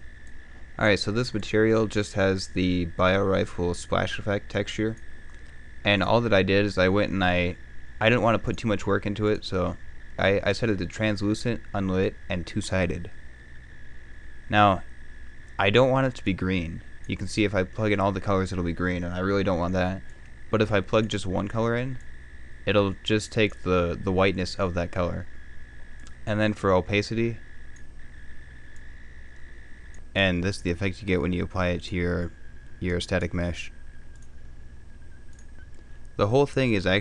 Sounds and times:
Speech: 0:00.8 - 0:05.0, 0:05.9 - 0:13.2, 0:14.5 - 0:14.9, 0:15.6 - 0:22.0, 0:22.7 - 0:25.3, 0:26.2 - 0:27.4, 0:30.2 - 0:33.8, 0:36.2 - 0:37.0.

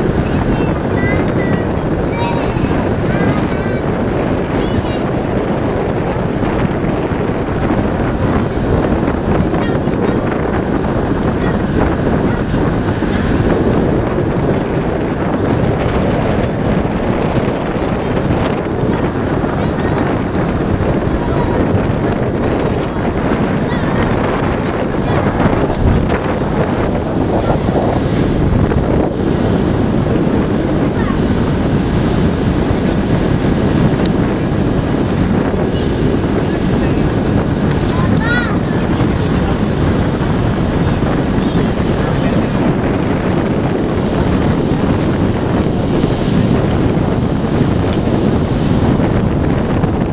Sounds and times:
Boat, Water vehicle: 0:00.0 - 0:50.1.

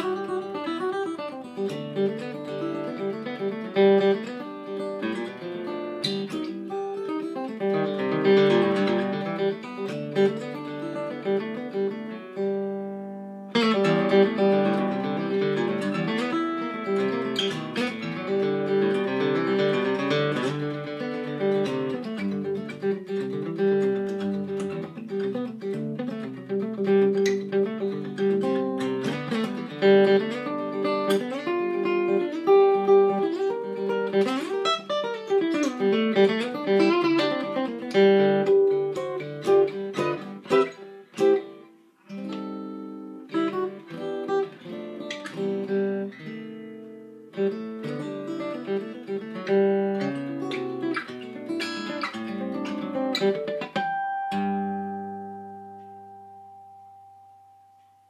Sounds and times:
Music: 0:00.0 - 0:58.1.

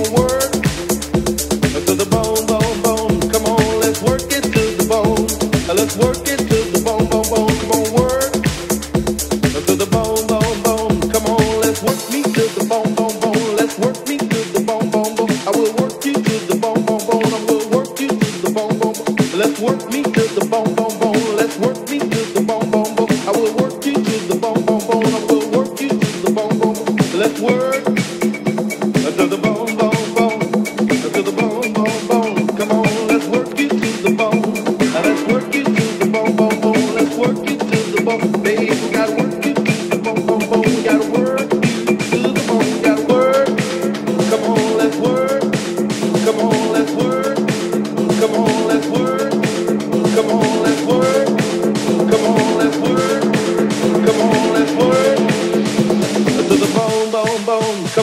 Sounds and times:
Disco: 0:00.0 - 0:58.0.

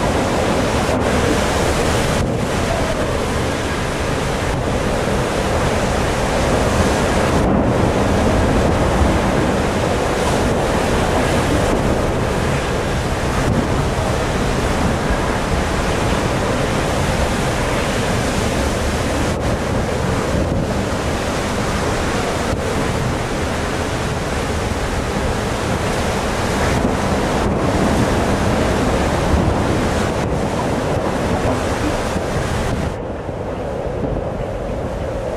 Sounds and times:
Sailboat, sailing ship: 0:00.0 - 0:35.3.

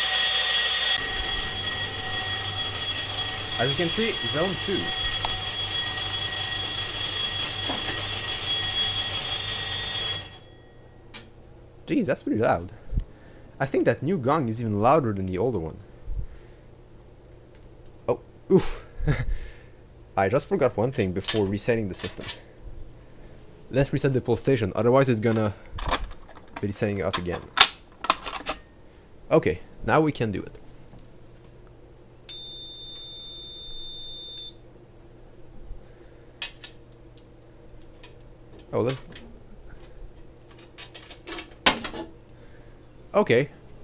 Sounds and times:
Speech: 0:03.6 - 0:04.9, 0:11.9 - 0:12.8, 0:13.6 - 0:15.8, 0:20.2 - 0:22.3, 0:23.7 - 0:25.6, 0:26.6 - 0:27.4, 0:29.3 - 0:30.6, 0:38.7 - 0:39.2, 0:43.1 - 0:43.6.

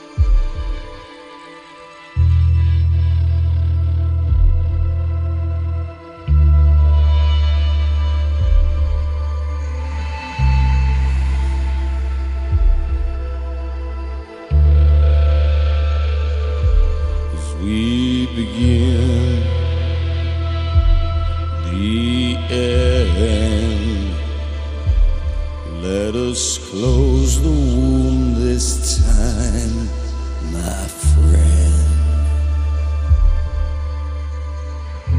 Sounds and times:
Mantra: 0:17.3 - 0:20.0, 0:21.6 - 0:24.6, 0:25.7 - 0:32.6.

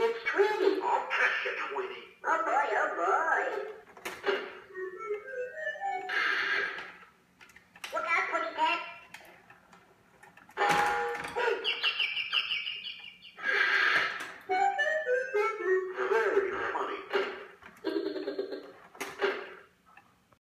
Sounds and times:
Music: 0:04.3 - 0:06.8, 0:14.5 - 0:17.2.

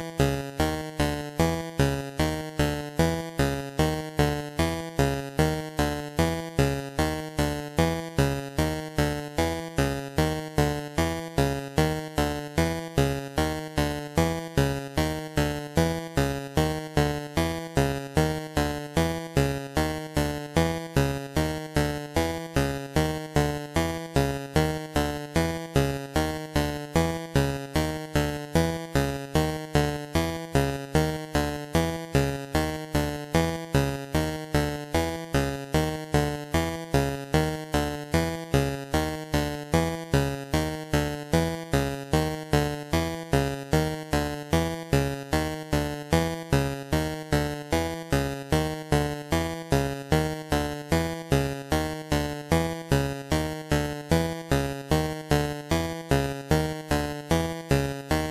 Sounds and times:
Music: 0:00.0 - 0:58.3.

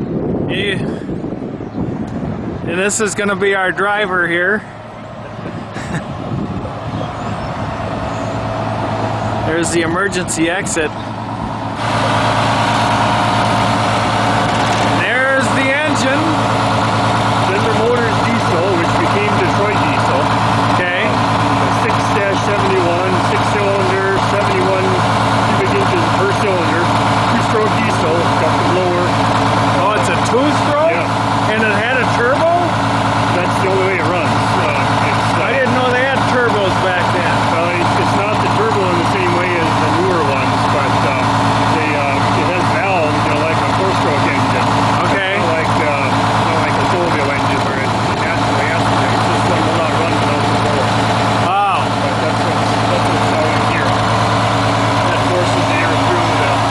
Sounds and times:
Vehicle: 0:00.0 - 0:56.7
Speech: 0:00.5 - 0:00.9, 0:02.7 - 0:04.6, 0:09.4 - 0:11.0, 0:14.9 - 0:16.4, 0:17.4 - 0:54.0, 0:55.0 - 0:56.7.

